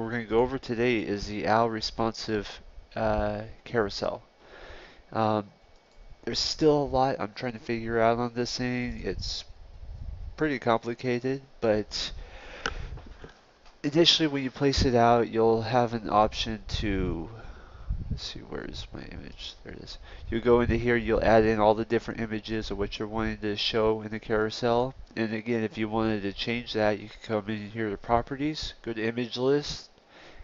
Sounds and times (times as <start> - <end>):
Speech: 0.0 - 4.3, 5.1 - 5.5, 6.2 - 9.5, 10.4 - 12.2, 13.8 - 30.0.